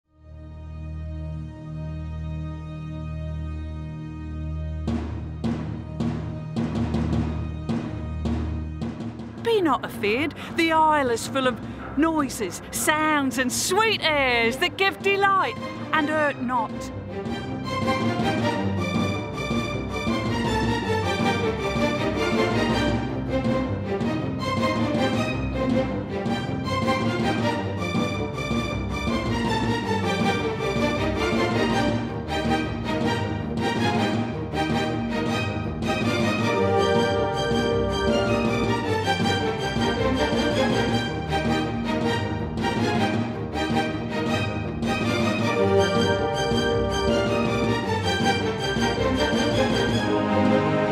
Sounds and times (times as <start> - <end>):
Timpani: 3.9 - 50.9.